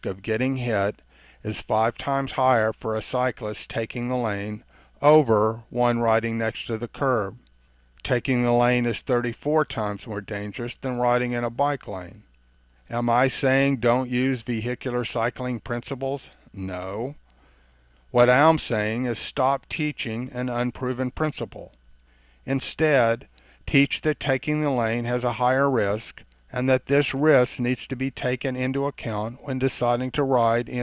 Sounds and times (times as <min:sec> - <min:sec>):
Speech: 0:00.0 - 0:07.4, 0:08.0 - 0:12.3, 0:12.9 - 0:17.2, 0:18.2 - 0:21.8, 0:22.5 - 0:30.8.